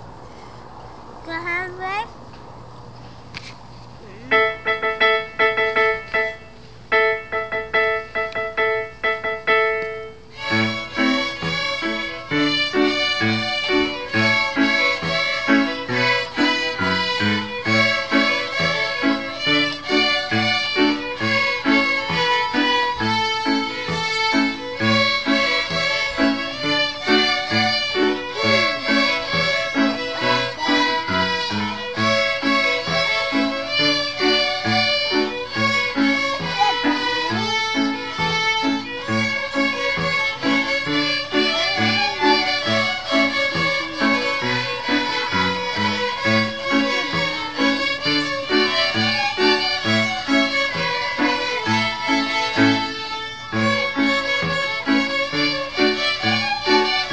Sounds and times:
Violin, fiddle: 7.2s - 57.1s.

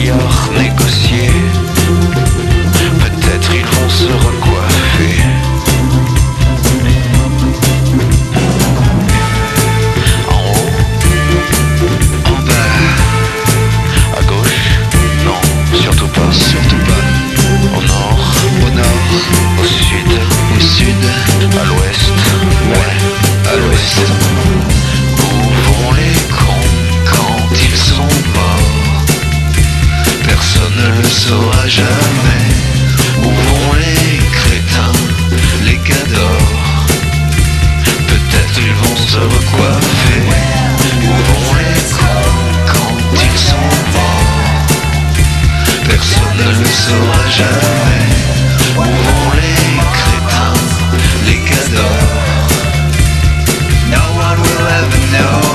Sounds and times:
Music: 0.0s - 55.5s.

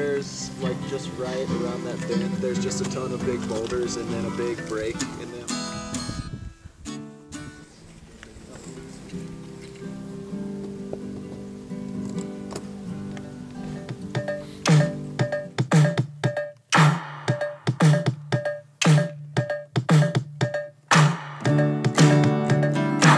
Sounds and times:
Speech: 0.0s - 5.6s, 7.7s - 9.0s
Music: 0.0s - 8.0s, 8.6s - 23.1s.

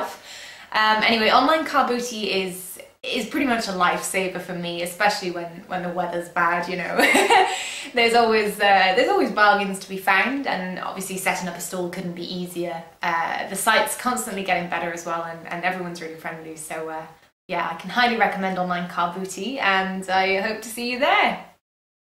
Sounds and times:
Speech: 0.0s - 21.5s.

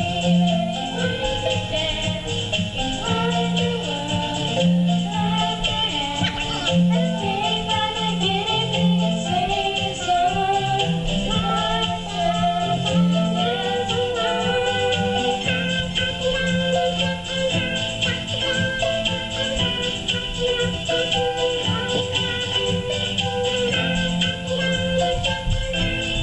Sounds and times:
Music: 0.0s - 26.2s.

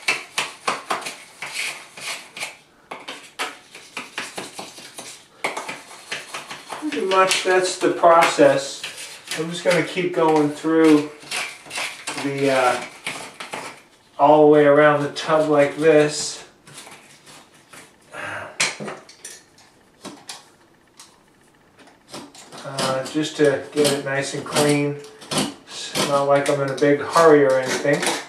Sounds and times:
Speech: 6.8s - 8.8s, 9.4s - 11.2s, 12.2s - 12.8s, 14.2s - 16.5s, 22.6s - 25.0s, 25.7s - 28.2s.

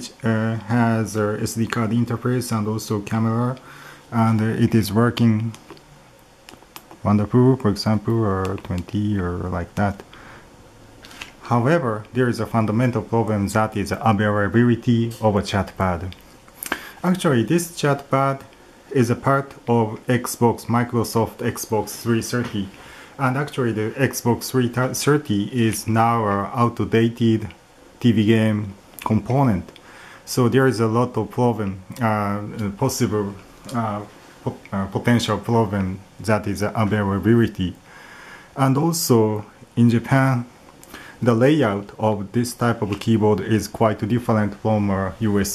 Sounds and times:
Speech: 0.0s - 5.8s, 7.0s - 10.1s, 11.4s - 37.9s, 38.6s - 40.6s, 41.2s - 45.5s.

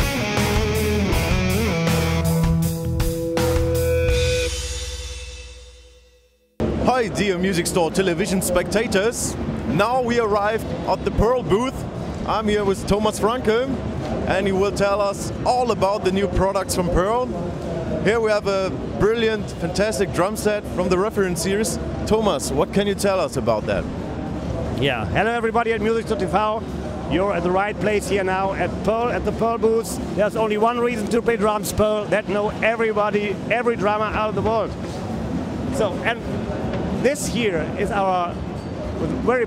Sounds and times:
Speech: 6.8s - 23.9s, 24.5s - 34.8s, 35.7s - 38.4s, 39.0s - 39.4s.

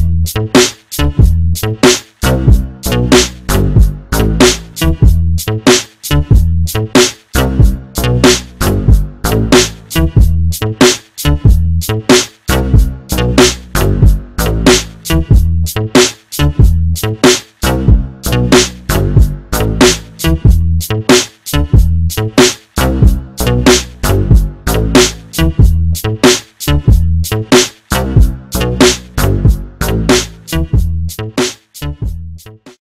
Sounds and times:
Music: 0.0s - 32.8s.

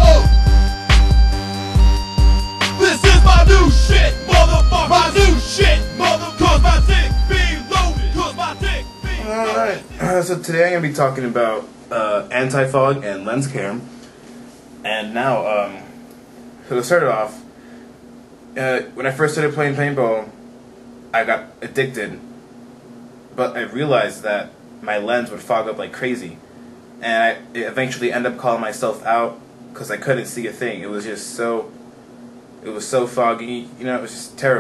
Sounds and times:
Speech: 9.2s - 13.9s, 14.8s - 15.9s, 16.7s - 17.4s, 18.6s - 20.4s, 21.2s - 22.2s, 23.4s - 26.4s, 27.0s - 31.7s, 32.6s - 34.6s.

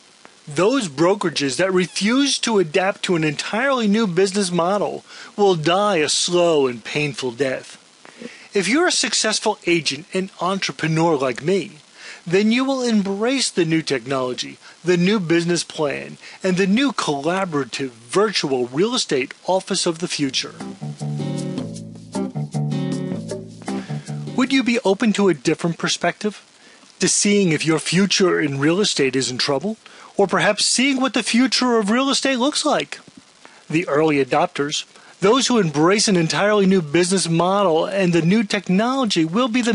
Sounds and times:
Speech: 0.5s - 7.8s, 8.5s - 20.6s, 24.4s - 39.7s.

